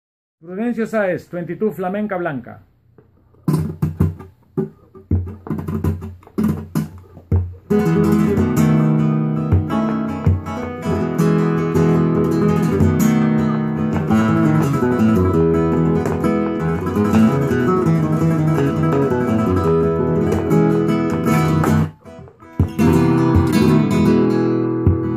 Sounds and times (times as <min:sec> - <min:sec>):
Flamenco: 0:03.0 - 0:25.1
Acoustic guitar: 0:03.2 - 0:25.1.